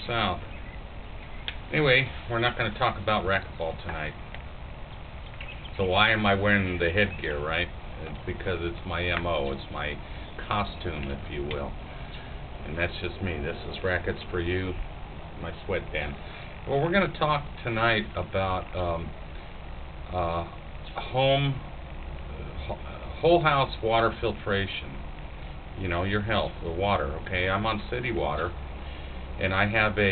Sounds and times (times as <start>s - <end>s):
Speech: 0.0s - 0.5s, 1.7s - 4.2s, 5.8s - 11.8s, 12.6s - 14.8s, 15.4s - 19.2s, 20.1s - 21.6s, 22.3s - 25.0s, 25.8s - 28.6s, 29.4s - 30.1s.